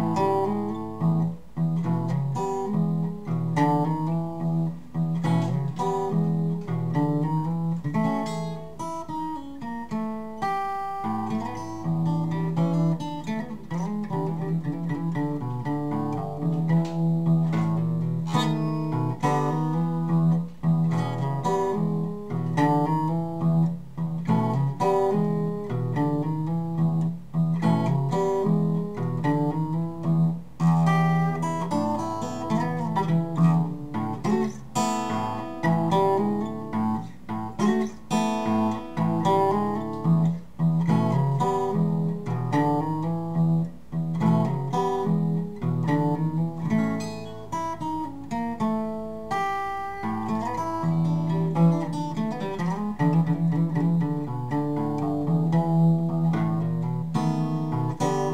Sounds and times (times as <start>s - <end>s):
Blues: 0.0s - 58.3s
Guitar: 0.0s - 58.3s.